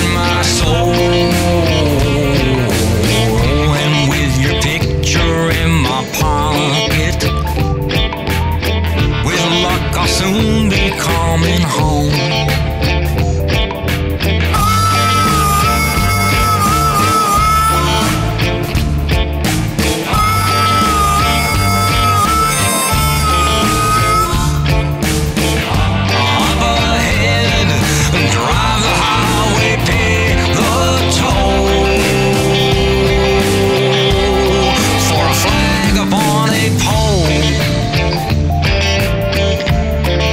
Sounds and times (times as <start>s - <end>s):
Rock music: 0.0s - 40.3s.